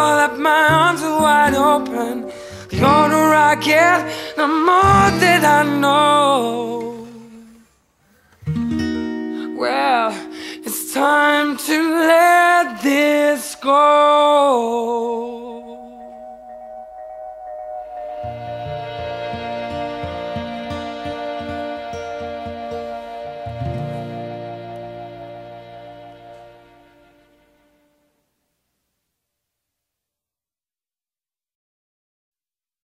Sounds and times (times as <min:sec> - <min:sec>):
Music: 0:00.0 - 0:07.2, 0:08.4 - 0:12.9, 0:15.2 - 0:28.3.